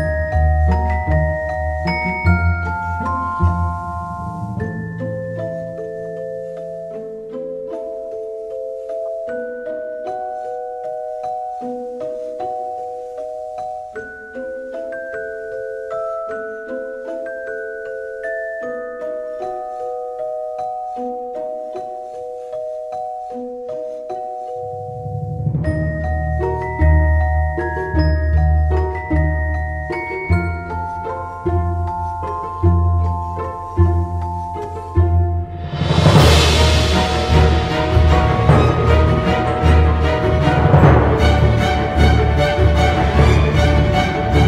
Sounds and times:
Glockenspiel: 0.0 - 44.4.

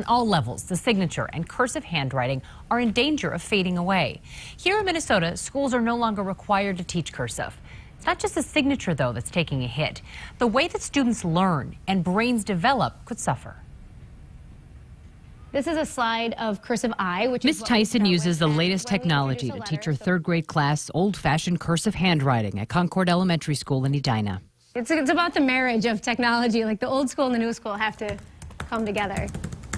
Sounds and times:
Speech: 15.6 - 29.3.

